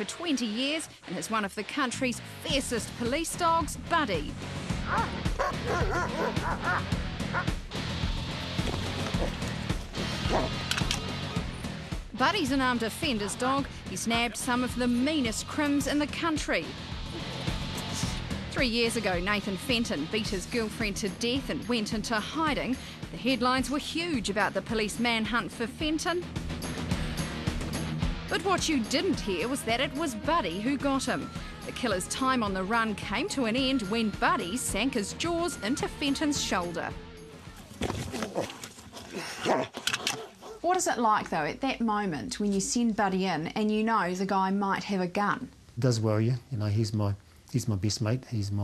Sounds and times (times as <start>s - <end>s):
Music: 0.0s - 38.9s, 39.9s - 44.9s
Speech: 18.6s - 26.2s, 28.3s - 36.9s, 40.6s - 48.6s.